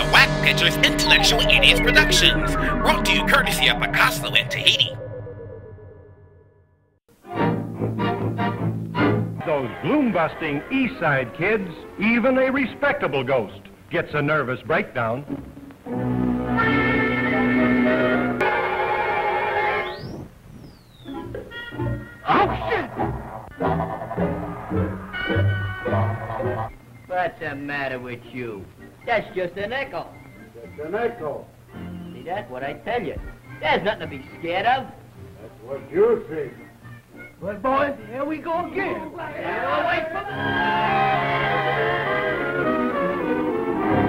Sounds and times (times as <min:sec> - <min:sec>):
Music: 0:00.0 - 0:05.0, 0:07.1 - 0:20.3, 0:21.0 - 0:44.0
Speech: 0:00.0 - 0:05.0, 0:09.4 - 0:15.3, 0:27.1 - 0:31.5.